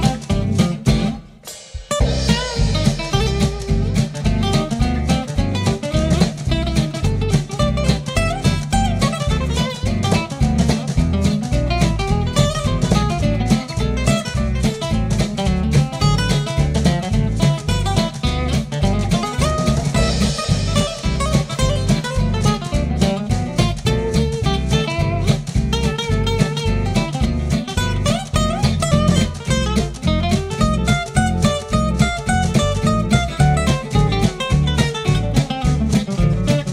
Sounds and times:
Bass drum: 0.0 - 36.7
Drum kit: 0.0 - 36.7.

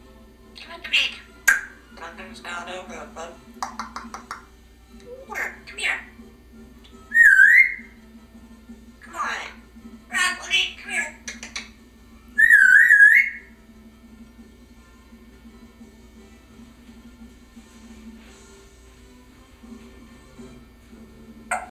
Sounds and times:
Music: 0.0 - 21.7.

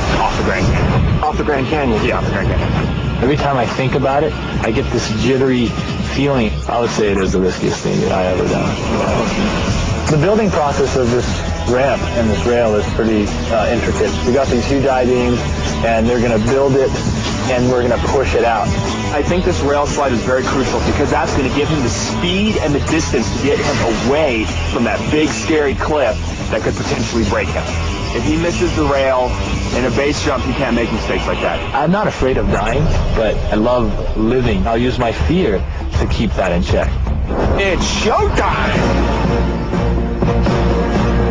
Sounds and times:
Speech: 0.0 - 9.4, 10.1 - 38.9.

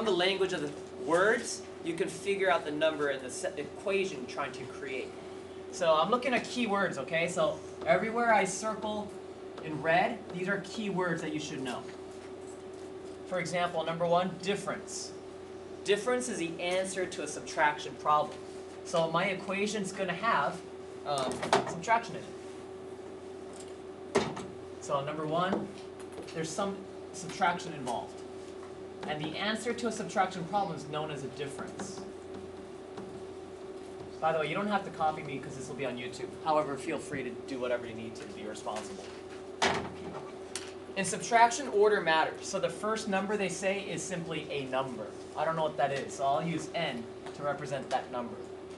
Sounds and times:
Speech: 0.0 - 12.0, 13.3 - 15.2, 15.8 - 22.4, 24.8 - 28.2, 29.0 - 32.1, 34.2 - 39.1, 41.0 - 48.5.

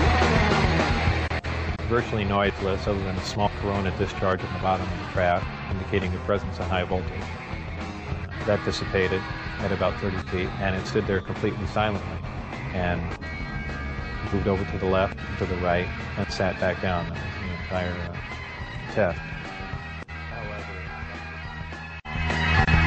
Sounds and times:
Music: 0.0 - 22.8
Speech: 1.8 - 7.2, 8.3 - 12.1, 12.8 - 13.2, 14.2 - 18.2, 18.9 - 19.2, 20.3 - 21.2.

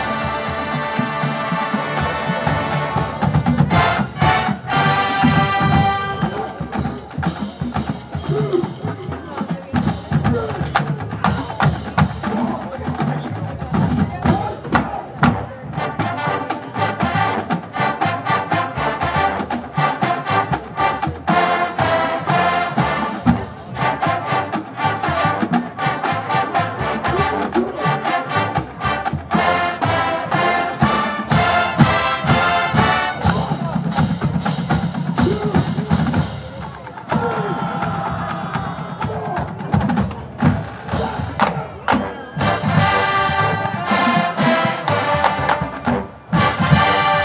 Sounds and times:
Music: 0.0 - 47.2
Speech: 8.2 - 17.4, 25.1 - 28.6, 33.0 - 34.2.

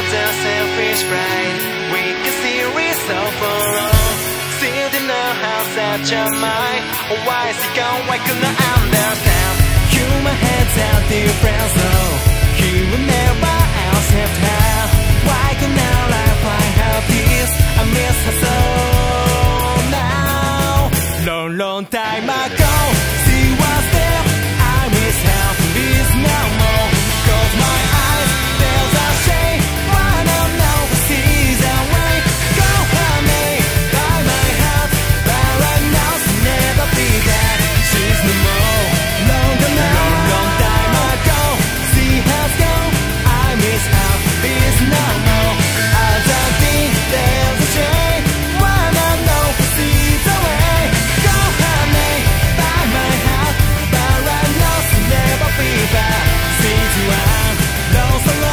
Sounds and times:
Grunge: 0.0 - 58.5.

